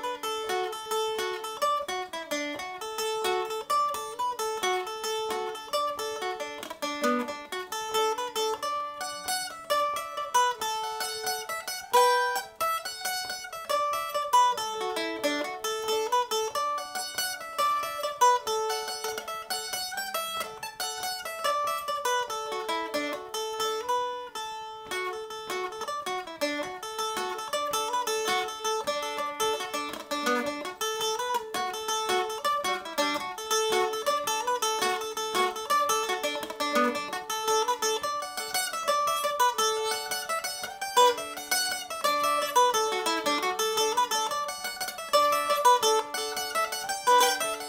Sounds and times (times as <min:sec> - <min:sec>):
Mandolin: 0:00.0 - 0:47.6.